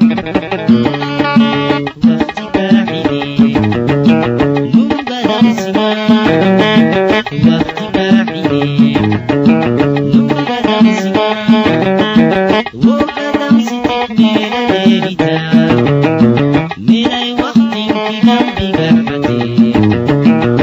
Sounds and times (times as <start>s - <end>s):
Music: 0.0s - 20.6s.